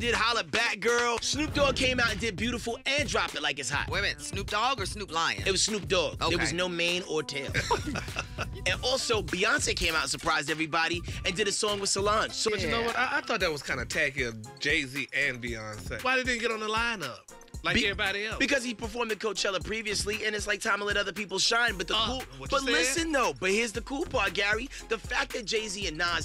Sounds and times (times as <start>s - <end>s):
Background music: 0.0s - 26.2s
Speech: 0.0s - 26.2s.